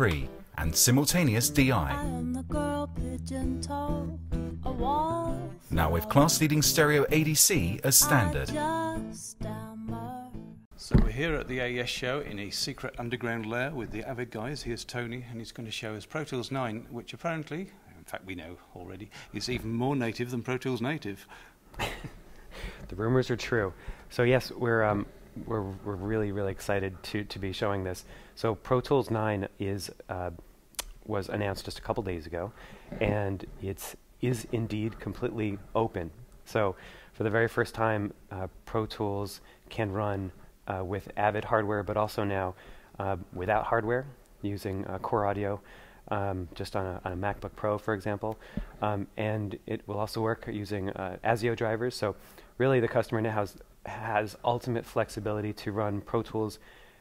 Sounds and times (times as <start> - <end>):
Speech: 0.0 - 2.1, 5.7 - 8.7, 10.8 - 21.3, 22.9 - 30.4, 31.0 - 56.6.